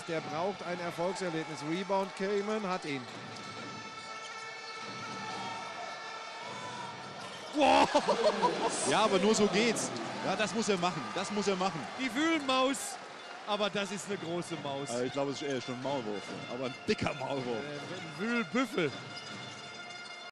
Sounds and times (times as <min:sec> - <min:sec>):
Music: 0:00.0 - 0:20.3
Speech: 0:08.8 - 0:19.0.